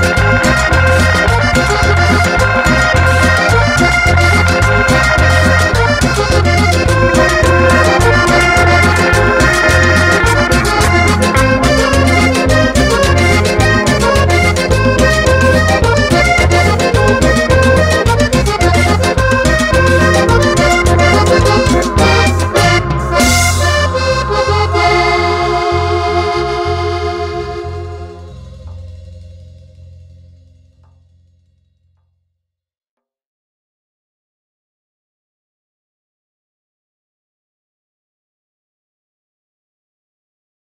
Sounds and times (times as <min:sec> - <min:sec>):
Accordion: 0:00.0 - 0:28.7.